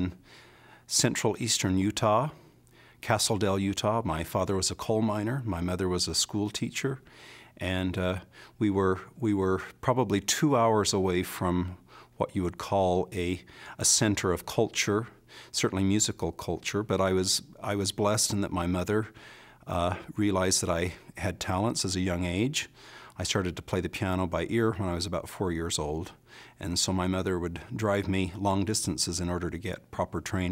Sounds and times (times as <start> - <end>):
Speech: 0.0 - 0.2, 0.9 - 2.4, 3.0 - 7.0, 7.6 - 30.5.